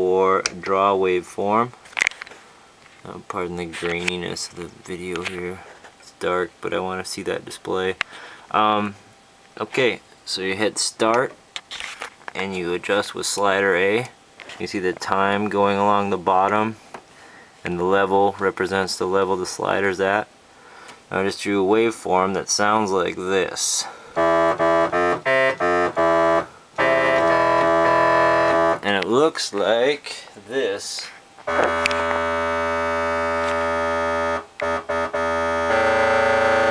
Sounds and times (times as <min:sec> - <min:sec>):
Speech: 0:00.0 - 0:01.8, 0:03.0 - 0:09.0, 0:09.6 - 0:11.4, 0:12.3 - 0:16.8, 0:17.6 - 0:20.3, 0:21.1 - 0:24.0, 0:28.8 - 0:31.2.